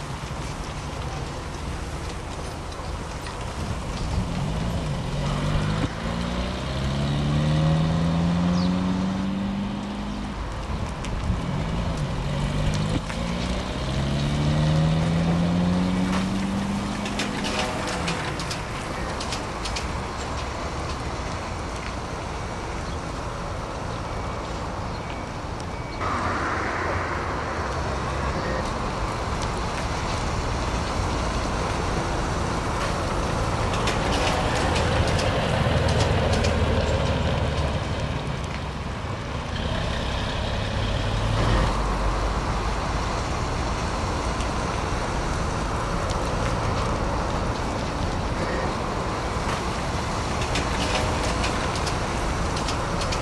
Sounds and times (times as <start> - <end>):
Bus: 0.0 - 53.2.